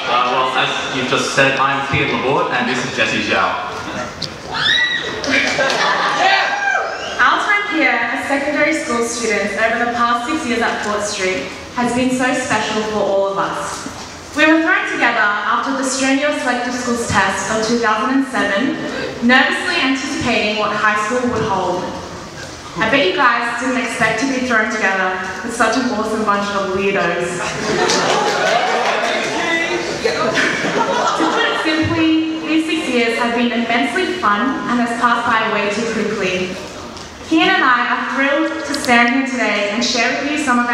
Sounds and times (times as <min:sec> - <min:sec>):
Female speech, woman speaking: 0:07.2 - 0:22.0, 0:22.8 - 0:27.5, 0:31.1 - 0:36.6, 0:37.3 - 0:40.7.